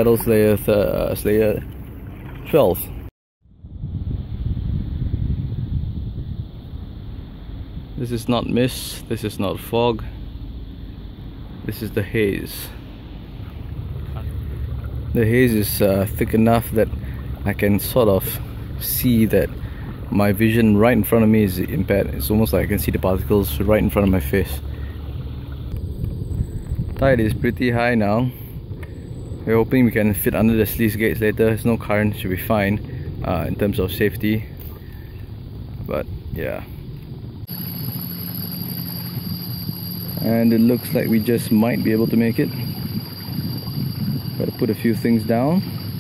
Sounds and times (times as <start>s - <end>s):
Speech: 0.0s - 1.7s, 2.5s - 3.0s, 8.0s - 10.2s, 11.6s - 12.8s, 15.1s - 24.6s, 27.0s - 28.4s, 29.5s - 34.6s, 35.8s - 36.8s, 40.2s - 42.6s, 44.4s - 45.7s
Boat, Water vehicle: 0.0s - 46.0s.